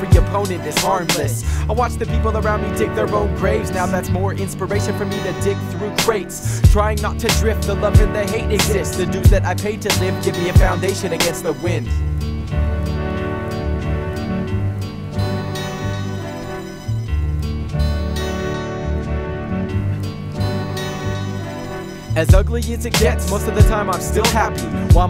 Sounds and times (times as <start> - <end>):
Music: 0.0 - 25.1.